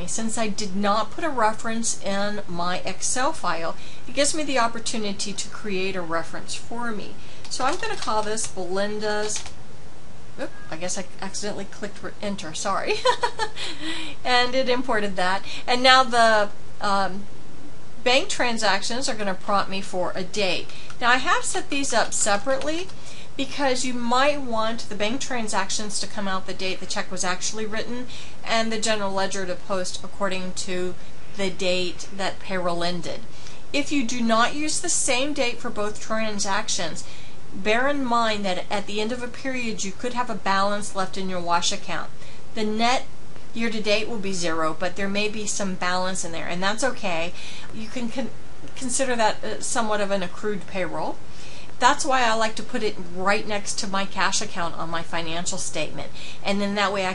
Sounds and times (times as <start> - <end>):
Speech: 0.0 - 9.5, 10.4 - 17.2, 18.1 - 33.2, 33.8 - 51.2, 51.8 - 57.1.